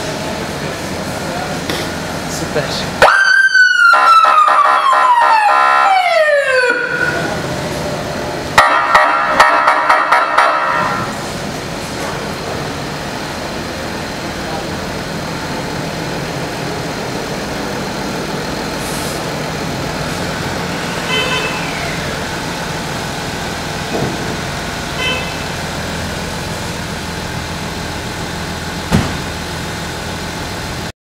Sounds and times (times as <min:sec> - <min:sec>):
Car: 0:00.0 - 0:04.2, 0:05.1 - 0:30.9.